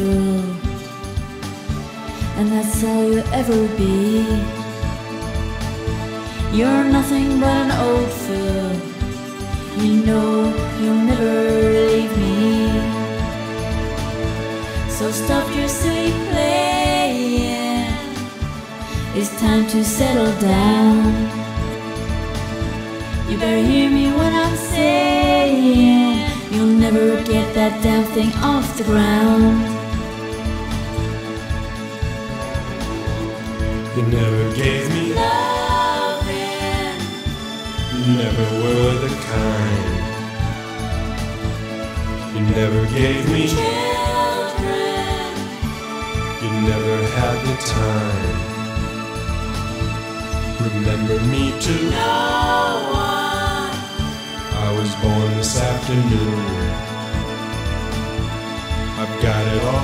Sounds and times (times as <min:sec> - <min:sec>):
Music: 0:00.0 - 0:59.8.